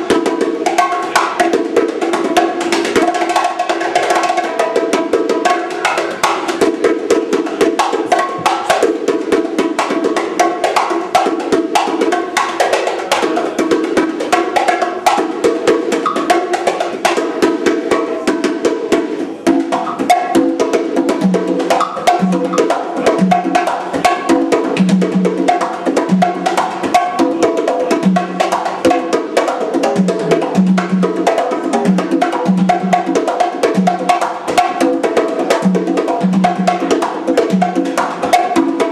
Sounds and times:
Drum: 0.0s - 38.9s
Drum kit: 0.0s - 38.9s
Wood block: 0.0s - 38.9s.

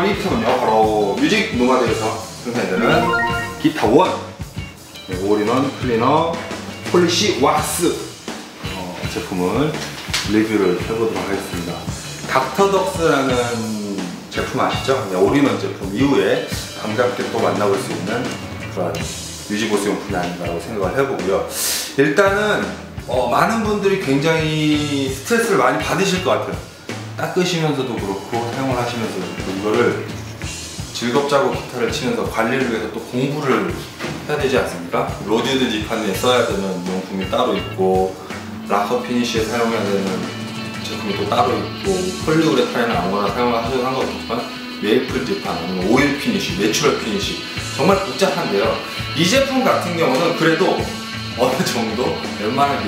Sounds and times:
Speech: 0.0s - 4.4s, 5.1s - 30.2s, 30.9s - 52.8s
Guitar: 0.0s - 21.5s, 22.1s - 52.8s.

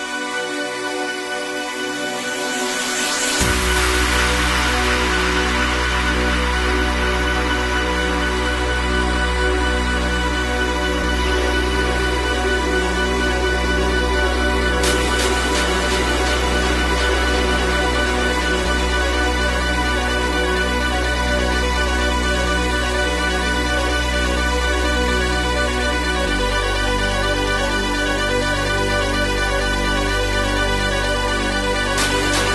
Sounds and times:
Music: 0.0s - 32.5s.

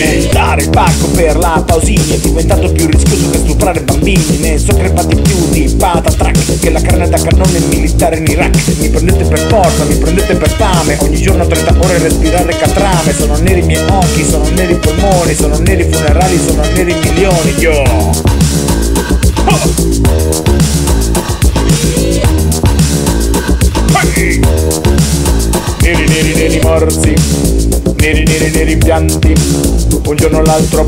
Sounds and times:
Disco: 0.0s - 30.8s
Music of Africa: 0.0s - 30.8s.

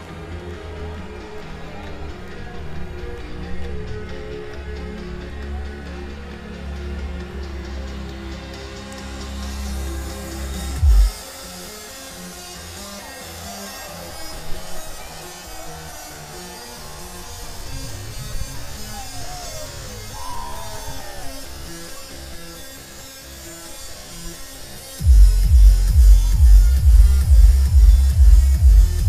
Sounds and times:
Disco: 0.0s - 29.0s.

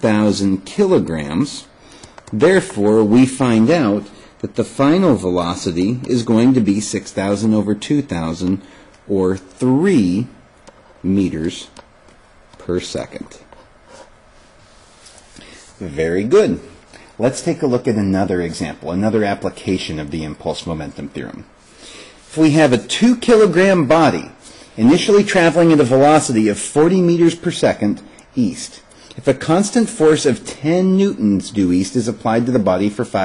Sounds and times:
Speech: 0.0s - 10.4s, 11.0s - 11.8s, 12.6s - 13.5s, 15.8s - 21.5s, 22.3s - 33.2s.

